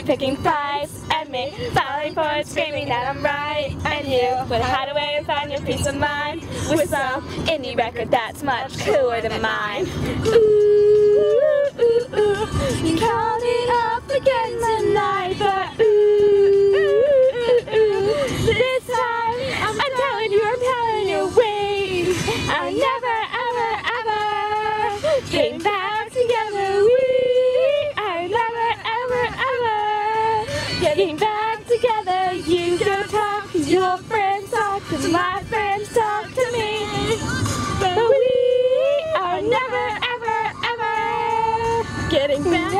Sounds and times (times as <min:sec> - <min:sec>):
Female singing: 0:00.0 - 0:42.7
Music: 0:00.0 - 0:42.7.